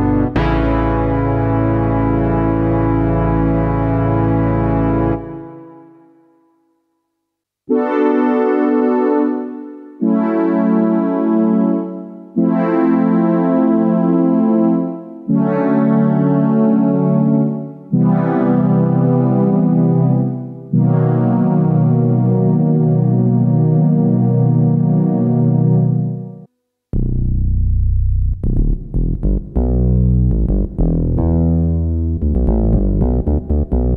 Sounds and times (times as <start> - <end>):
Synthesizer: 0.0 - 6.8, 7.7 - 27.1, 28.5 - 33.9.